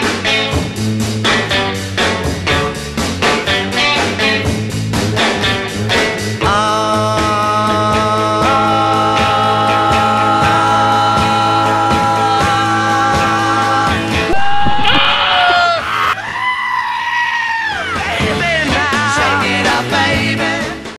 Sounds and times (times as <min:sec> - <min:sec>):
Music: 0:00.0 - 0:14.8, 0:17.6 - 0:20.9
Bellow: 0:14.3 - 0:18.0
Whoop: 0:14.3 - 0:18.0.